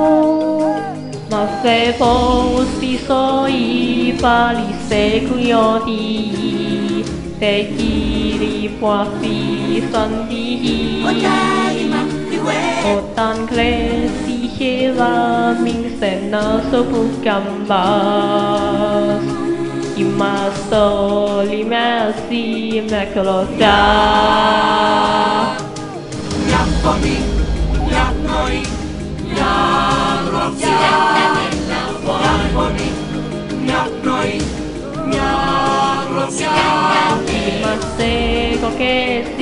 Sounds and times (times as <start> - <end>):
A capella: 0.0 - 39.4.